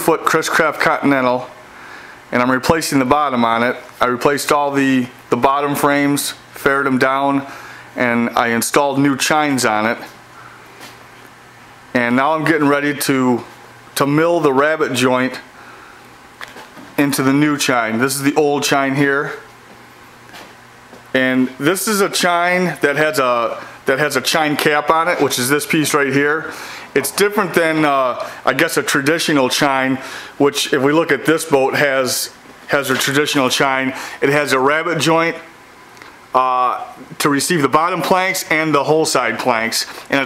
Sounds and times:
Speech: 0.0s - 1.6s, 2.3s - 10.2s, 11.9s - 15.5s, 17.0s - 19.5s, 21.1s - 35.5s, 36.3s - 40.2s.

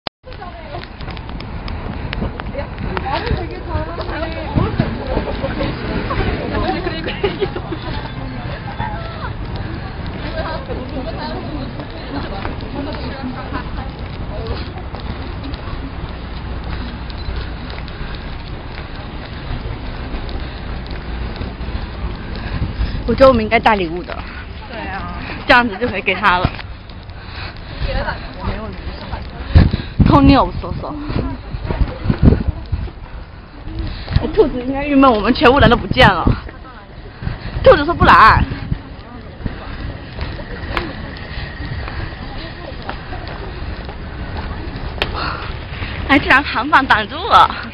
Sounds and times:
Hubbub, speech noise, speech babble: 0.2s - 47.7s
Outside, urban or manmade: 0.2s - 47.7s.

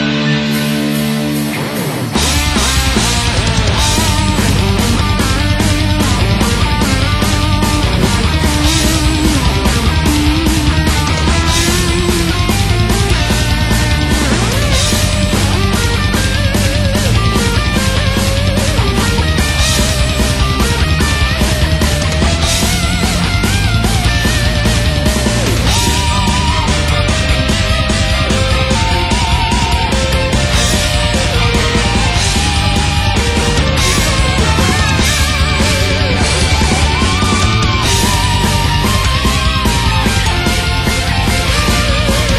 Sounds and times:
Electric guitar: 0.0s - 42.3s
Strum: 0.0s - 42.3s.

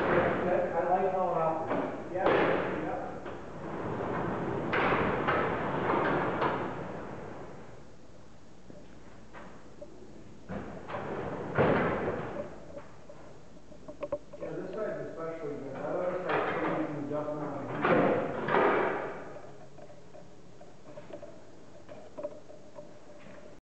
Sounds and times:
Inside, large room or hall: 0.0s - 23.6s
Speech: 0.2s - 3.2s, 14.4s - 18.2s.

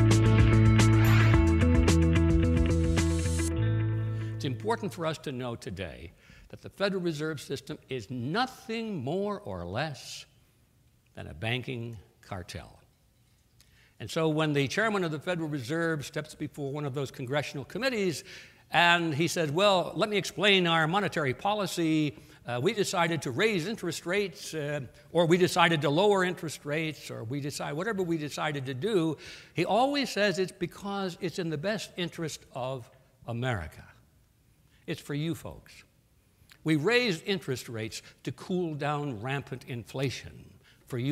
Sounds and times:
Narration, monologue: 3.0s - 41.1s
Male speech, man speaking: 4.4s - 10.3s, 11.2s - 12.9s, 14.0s - 34.0s, 34.9s - 35.9s, 36.6s - 41.1s.

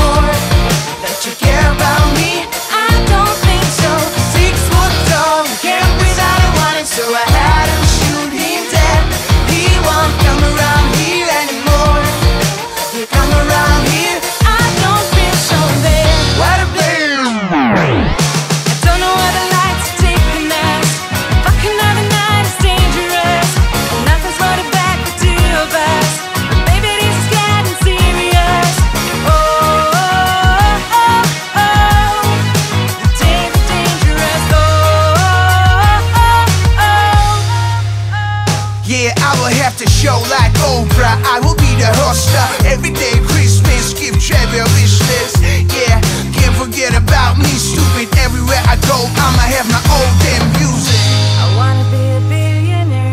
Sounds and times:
Pop music: 0.0s - 53.1s.

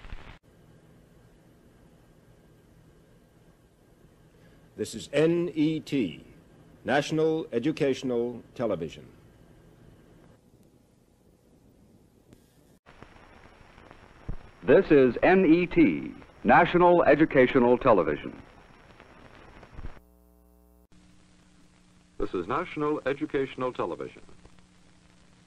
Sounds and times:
Speech: 4.8s - 9.2s, 14.6s - 18.4s, 22.2s - 24.4s.

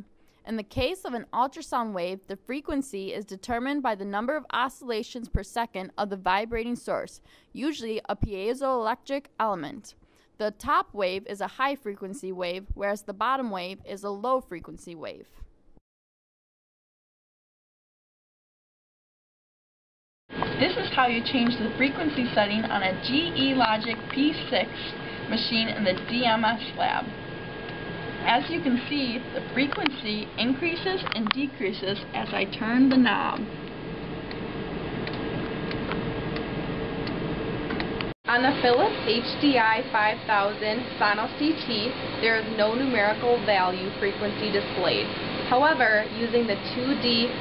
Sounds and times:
Speech: 0.0s - 15.4s, 20.6s - 27.1s, 28.2s - 33.5s, 38.3s - 47.4s.

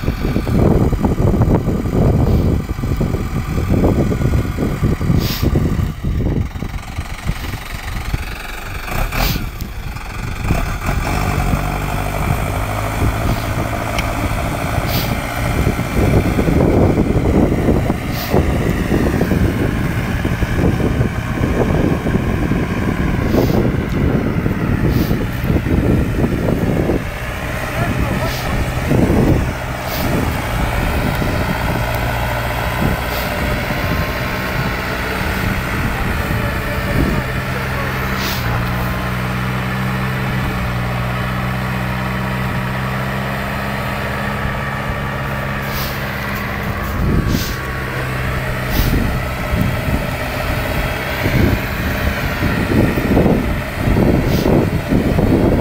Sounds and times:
Speech: 27.7s - 28.7s, 34.9s - 38.4s.

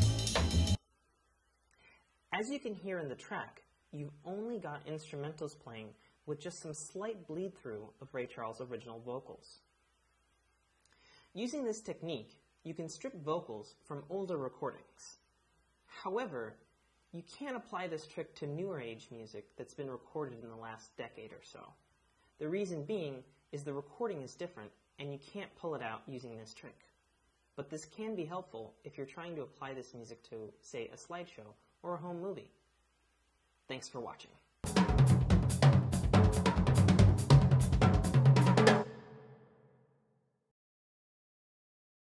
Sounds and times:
Speech: 2.3s - 9.7s, 11.4s - 15.2s, 15.9s - 21.8s, 22.4s - 26.9s, 27.6s - 32.6s, 33.7s - 34.4s.

